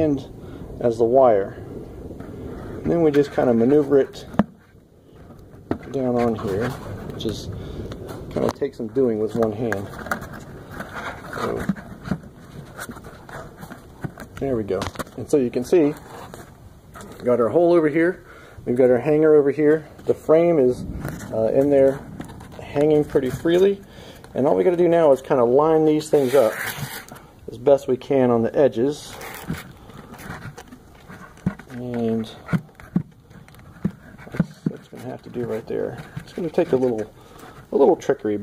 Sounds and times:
Speech: 0.0s - 1.6s, 2.8s - 4.4s, 5.9s - 7.6s, 8.3s - 10.0s, 11.4s - 11.8s, 14.4s - 16.0s, 17.2s - 22.0s, 22.6s - 26.8s, 27.5s - 29.2s, 31.7s - 32.5s, 34.4s - 37.1s, 37.7s - 38.4s.

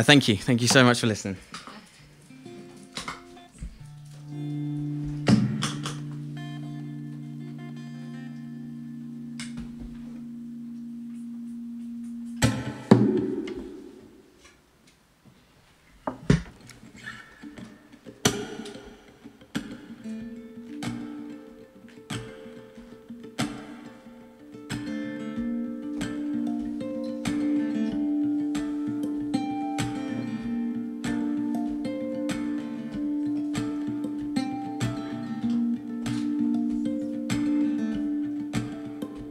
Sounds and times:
Music: 1.8s - 14.3s, 16.5s - 39.3s.

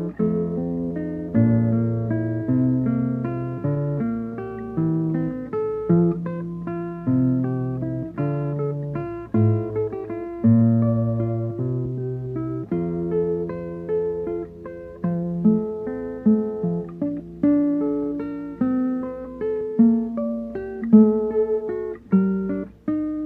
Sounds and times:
Acoustic guitar: 0.0s - 23.2s
Strum: 0.0s - 23.2s.

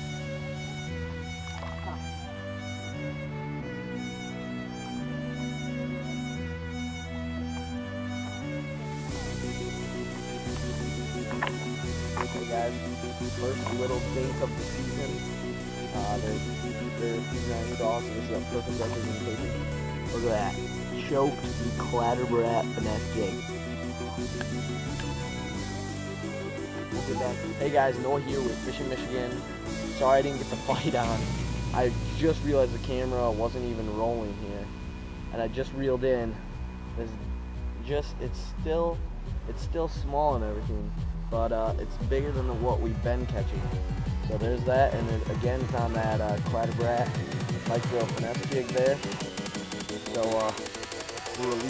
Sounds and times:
Music: 0.0s - 51.6s
Speech: 12.3s - 12.7s, 13.4s - 15.2s, 16.0s - 16.4s, 17.0s - 19.5s, 20.1s - 23.4s, 27.0s - 29.4s, 30.0s - 31.2s, 31.8s - 34.7s, 35.3s - 36.4s, 37.0s - 37.2s, 37.8s - 43.7s, 44.3s - 49.0s, 50.1s - 50.6s, 51.3s - 51.6s.

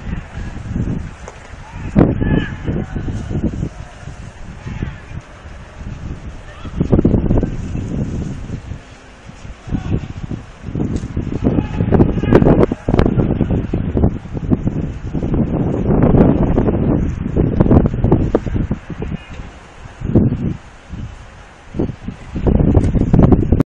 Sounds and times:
Wind: 0.0s - 23.6s.

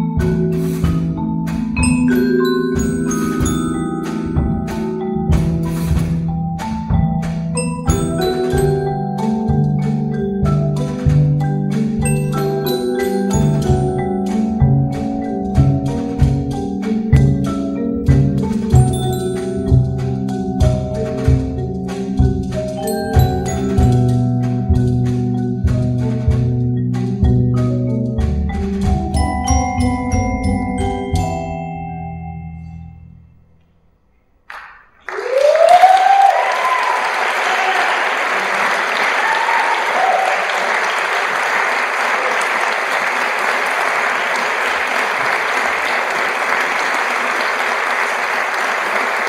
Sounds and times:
Glockenspiel: 0.0s - 33.4s.

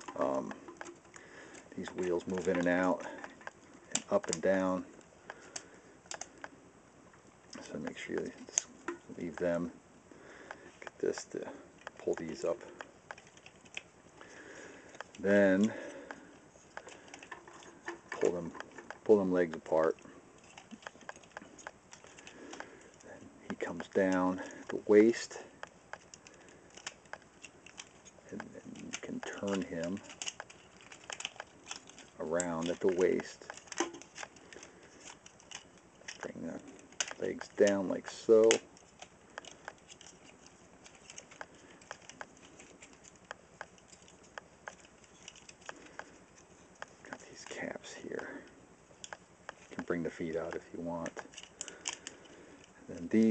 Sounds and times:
Inside, small room: 0.0s - 53.3s
Speech: 0.1s - 0.6s, 1.8s - 3.2s, 3.9s - 4.9s, 7.6s - 9.8s, 11.0s - 12.8s, 15.2s - 15.8s, 18.2s - 20.0s, 23.1s - 25.5s, 28.3s - 30.0s, 32.2s - 33.5s, 36.2s - 38.6s, 47.1s - 48.5s, 49.8s - 51.2s, 52.9s - 53.3s.

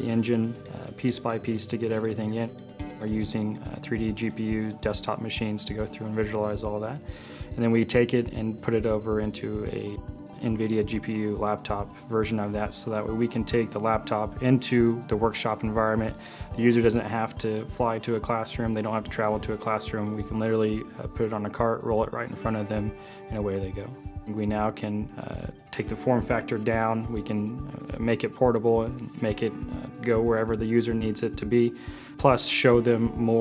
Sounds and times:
Speech: 0.0s - 7.0s, 7.6s - 33.4s
Music: 0.0s - 33.4s.

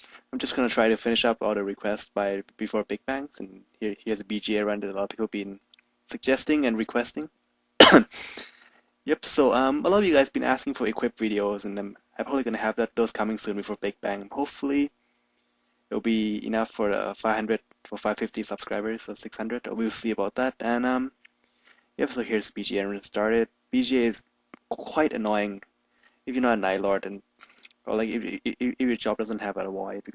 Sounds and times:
Speech: 0.2s - 7.3s, 9.1s - 14.9s, 15.9s - 21.2s, 22.0s - 25.7s, 26.3s - 30.1s.

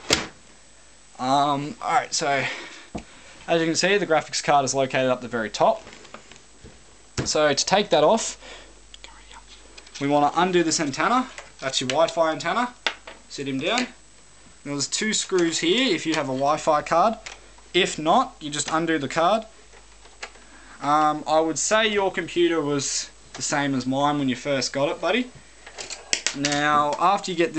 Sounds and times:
Inside, small room: 0.0s - 27.5s
Speech: 1.2s - 2.6s, 3.5s - 5.9s, 7.2s - 8.4s, 10.0s - 14.0s, 14.6s - 17.2s, 17.8s - 19.5s, 20.8s - 25.3s, 26.3s - 27.5s.

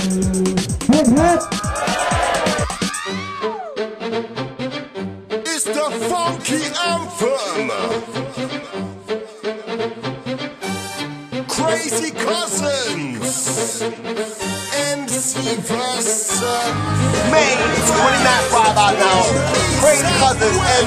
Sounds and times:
Music: 0.0s - 20.8s
Speech: 0.9s - 1.4s, 5.5s - 8.1s, 11.5s - 13.9s, 14.7s - 20.8s.

